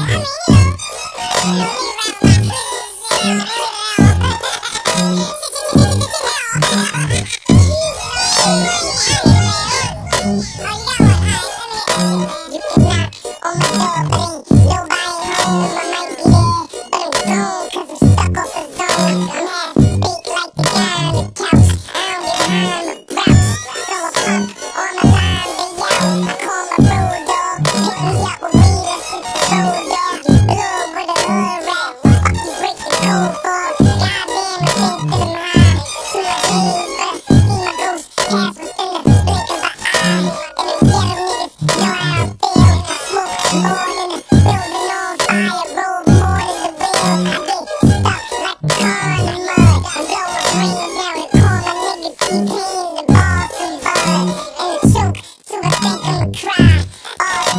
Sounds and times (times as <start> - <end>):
Music: 0.0 - 57.5.